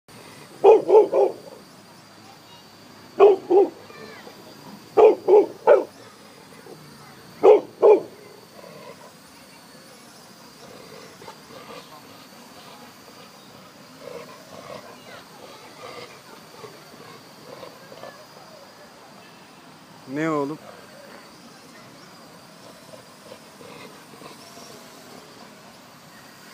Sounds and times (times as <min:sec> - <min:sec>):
Bark: 0:00.6 - 0:01.4, 0:03.2 - 0:03.8, 0:05.0 - 0:06.0, 0:07.4 - 0:08.2.